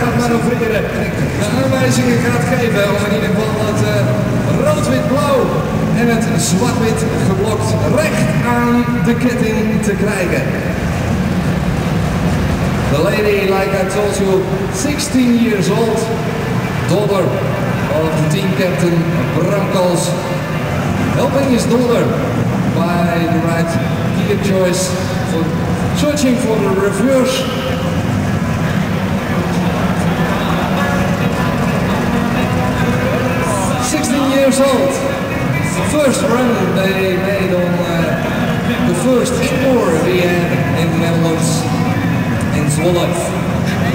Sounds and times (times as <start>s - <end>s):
Speech: 0.0s - 10.7s, 12.9s - 43.9s.